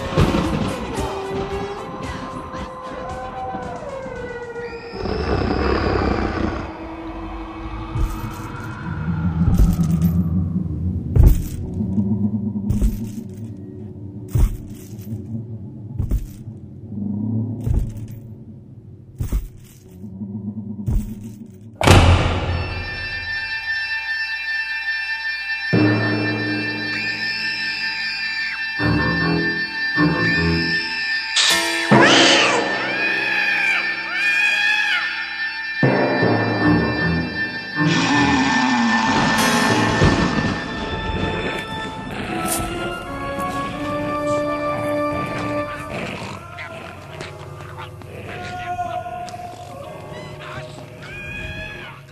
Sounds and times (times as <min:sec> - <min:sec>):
Music: 0:00.0 - 0:10.4, 0:21.8 - 0:48.0.